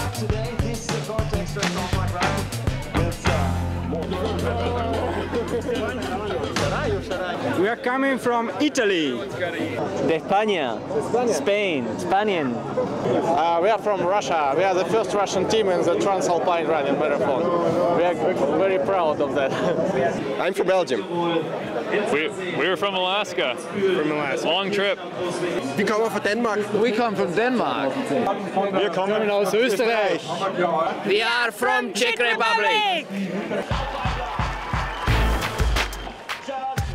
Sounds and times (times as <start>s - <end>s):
Outside, urban or manmade: 0.0s - 36.9s.